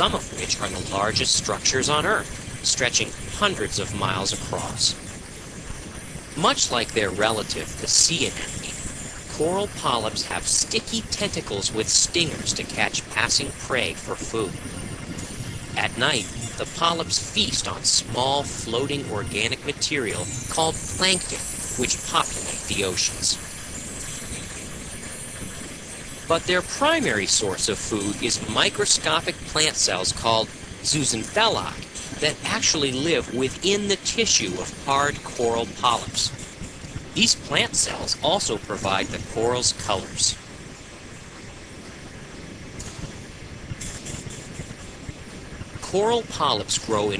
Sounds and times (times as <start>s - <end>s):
Speech: 0.0s - 5.0s, 6.4s - 14.6s, 15.8s - 23.4s, 26.3s - 36.4s, 37.2s - 40.4s, 45.8s - 47.1s.